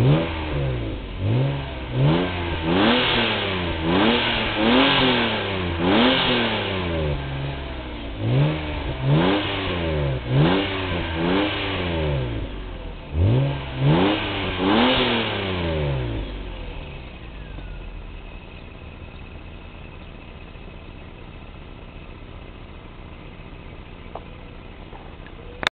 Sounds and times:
Car: 0:00.0 - 0:25.7.

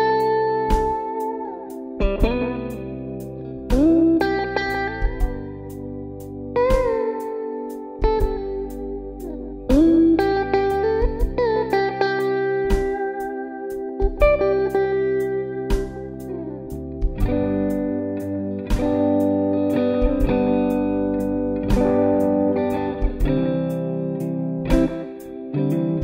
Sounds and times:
Electric guitar: 0:00.0 - 0:26.0.

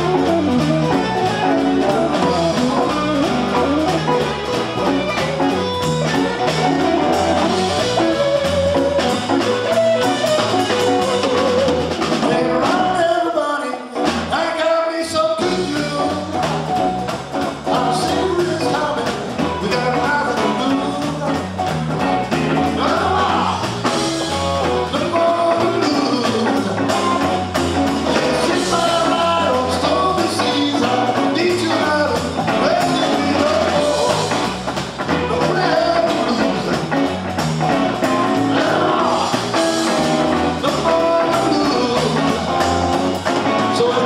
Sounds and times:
Drum: 0:00.0 - 0:13.1, 0:14.0 - 0:14.4, 0:15.4 - 0:44.0
Guitar: 0:00.0 - 0:44.0
Singing: 0:12.0 - 0:16.8, 0:17.6 - 0:21.4, 0:22.6 - 0:27.3, 0:28.1 - 0:37.2, 0:38.1 - 0:42.7, 0:43.4 - 0:44.0.

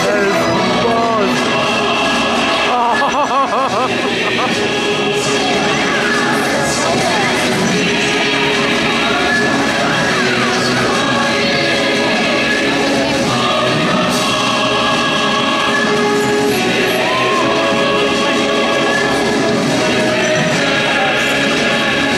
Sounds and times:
Speech: 0:00.0 - 0:01.6, 0:05.2 - 0:13.4, 0:20.2 - 0:22.1
Music: 0:00.0 - 0:22.1.

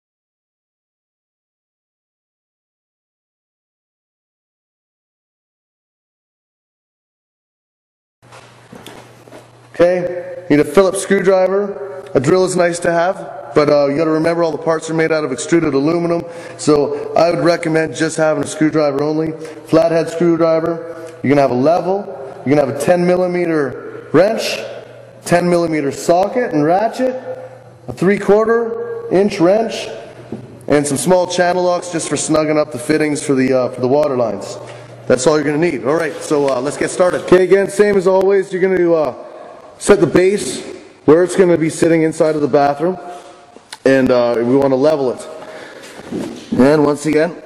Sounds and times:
Speech: 0:09.8 - 0:30.0, 0:30.7 - 0:43.1, 0:43.8 - 0:45.4, 0:46.6 - 0:47.4.

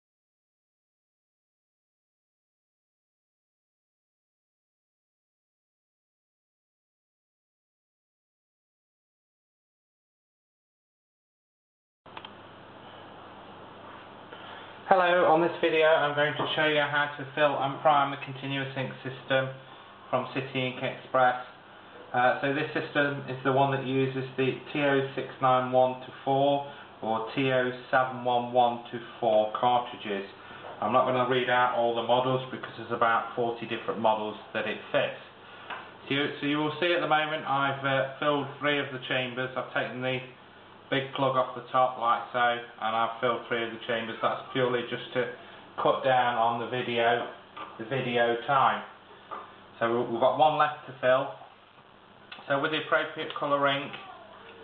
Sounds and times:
Speech: 0:14.9 - 0:35.4, 0:36.0 - 0:49.0, 0:49.8 - 0:51.6, 0:52.4 - 0:54.6.

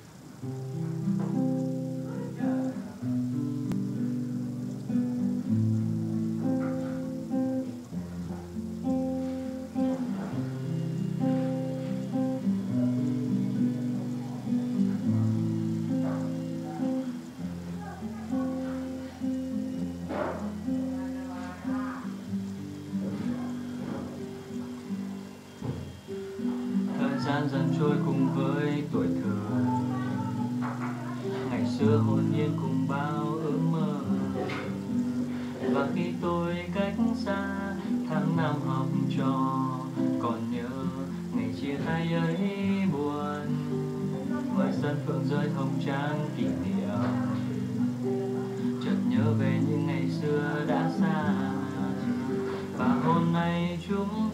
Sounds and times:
Acoustic guitar: 0:00.0 - 0:54.3
Strum: 0:00.0 - 0:54.3
Speech: 0:20.1 - 0:22.2, 0:26.9 - 0:34.8, 0:35.6 - 0:54.3.

